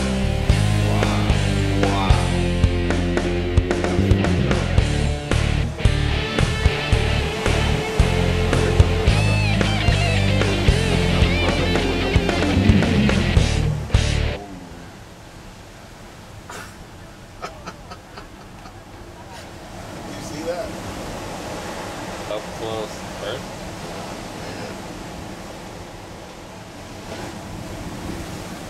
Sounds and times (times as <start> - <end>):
Speech: 0.9 - 2.4, 19.1 - 20.8, 22.3 - 23.4, 24.4 - 24.8.